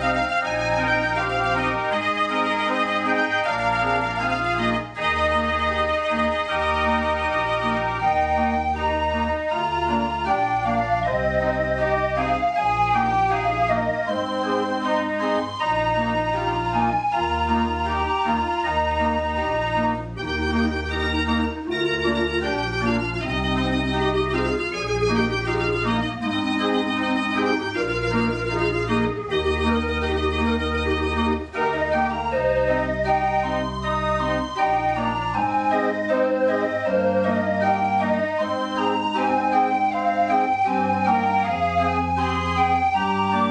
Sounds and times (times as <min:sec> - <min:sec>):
Music: 0:00.0 - 0:43.5.